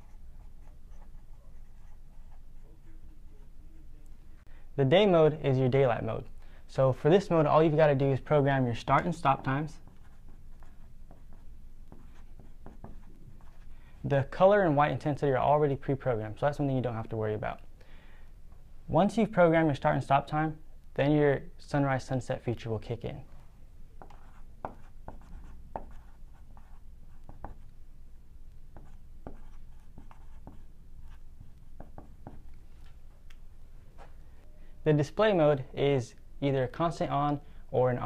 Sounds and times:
Writing: 0.0s - 3.8s, 9.0s - 13.7s, 24.0s - 27.8s, 28.7s - 32.6s.

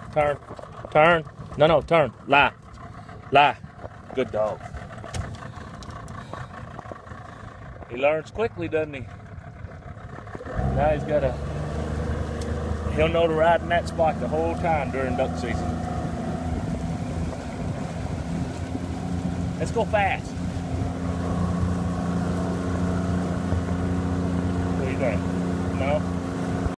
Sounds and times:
Motorboat, speedboat: 0.0s - 26.7s
Speech: 3.3s - 3.6s, 4.2s - 4.6s, 7.9s - 9.0s, 10.8s - 11.4s, 12.9s - 15.6s, 19.6s - 20.3s, 24.8s - 26.0s.

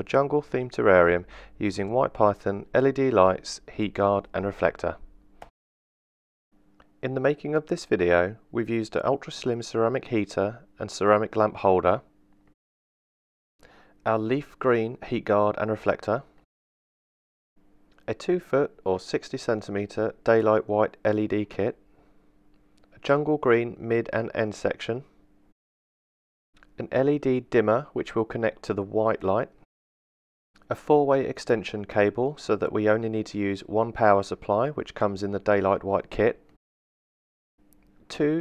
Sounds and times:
Speech: 0.0s - 5.1s, 7.0s - 12.1s, 14.0s - 16.4s, 18.0s - 21.8s, 23.0s - 25.1s, 26.8s - 29.6s, 30.7s - 36.4s, 38.1s - 38.4s.

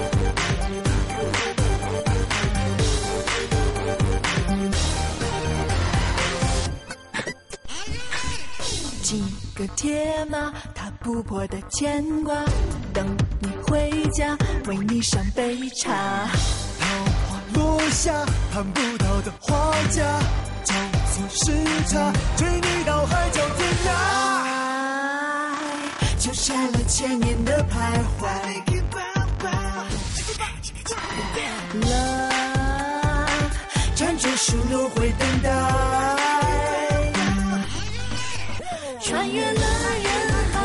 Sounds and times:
Pop music: 0.0s - 7.9s, 8.6s - 40.6s.

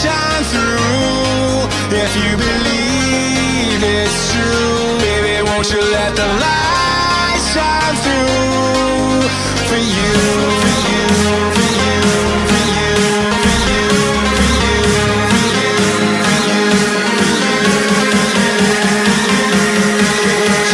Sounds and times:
Exciting music: 9.2s - 20.7s.

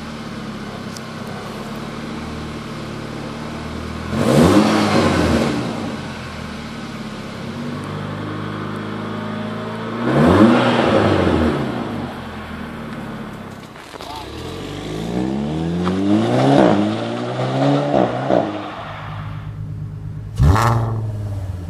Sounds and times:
Crackle: 12.8s - 15.1s.

